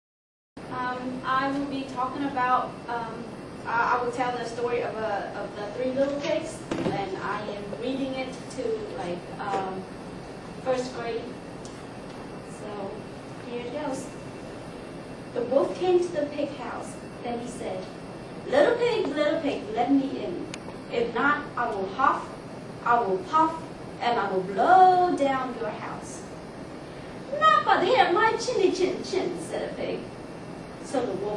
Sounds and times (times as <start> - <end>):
Narration, monologue: 0.6 - 31.3
Female speech, woman speaking: 0.7 - 9.9, 10.6 - 11.4, 12.5 - 14.1, 15.4 - 17.9, 18.5 - 26.3, 27.3 - 30.1, 30.8 - 31.3.